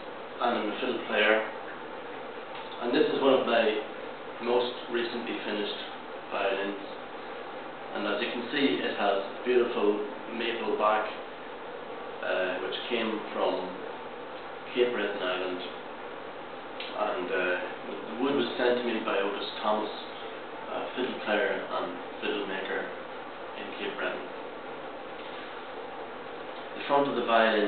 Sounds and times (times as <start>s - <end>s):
Speech: 0.4s - 1.6s, 2.8s - 7.0s, 7.9s - 11.3s, 12.2s - 13.9s, 14.7s - 15.8s, 16.9s - 23.0s, 23.6s - 24.4s, 26.8s - 27.6s.